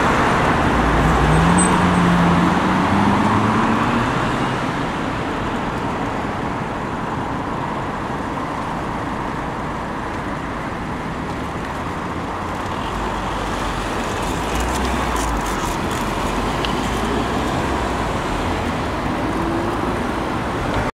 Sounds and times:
Traffic noise, roadway noise: 0.0 - 20.9.

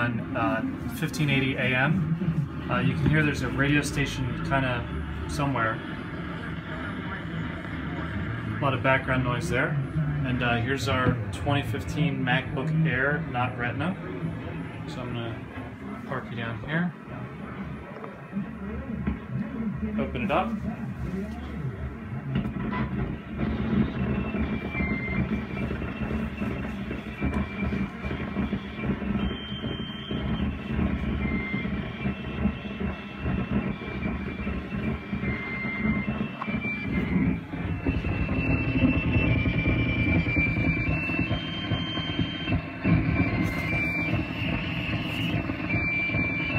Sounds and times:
Speech: 0.0 - 2.0, 2.7 - 14.2, 14.9 - 22.4.

